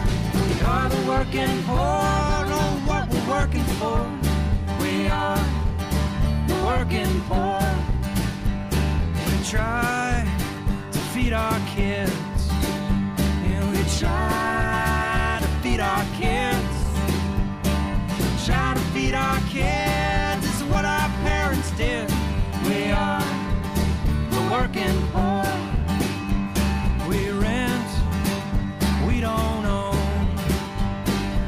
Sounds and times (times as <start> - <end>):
Bass guitar: 0.0 - 31.4.